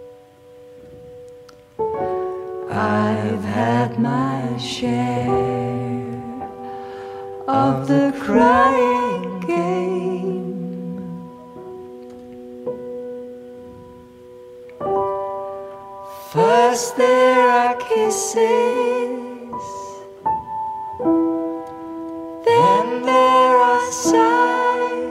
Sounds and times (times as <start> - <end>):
Electric piano: 0.0 - 25.1.